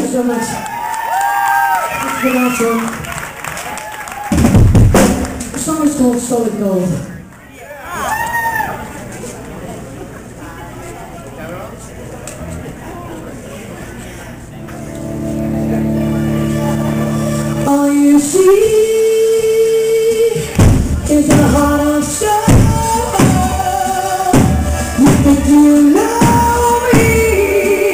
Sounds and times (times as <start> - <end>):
Music: 14.6 - 27.9
Female singing: 17.6 - 27.9.